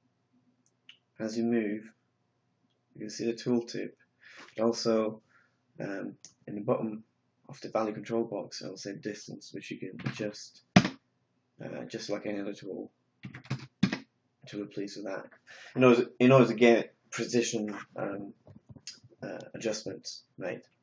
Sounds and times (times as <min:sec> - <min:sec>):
Speech: 0:01.2 - 0:01.9, 0:03.0 - 0:05.2, 0:05.8 - 0:10.7, 0:11.6 - 0:12.9, 0:14.5 - 0:20.7.